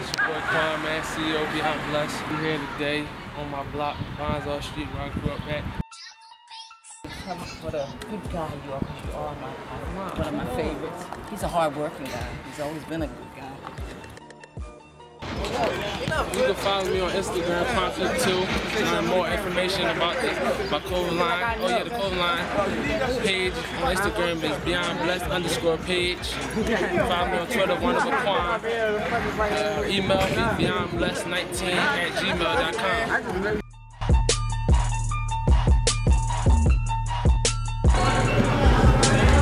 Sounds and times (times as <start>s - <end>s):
Music: 11.4s - 28.6s, 29.4s - 39.4s.